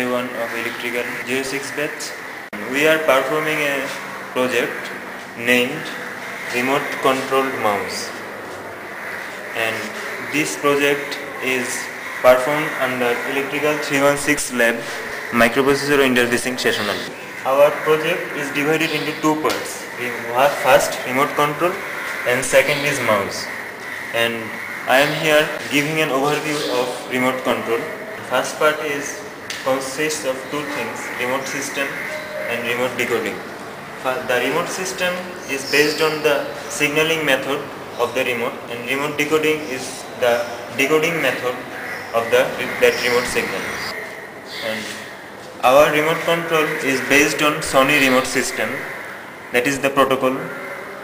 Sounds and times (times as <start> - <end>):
Speech: 0.0 - 8.2, 9.6 - 23.5, 24.2 - 45.0, 45.6 - 48.8, 49.6 - 50.5.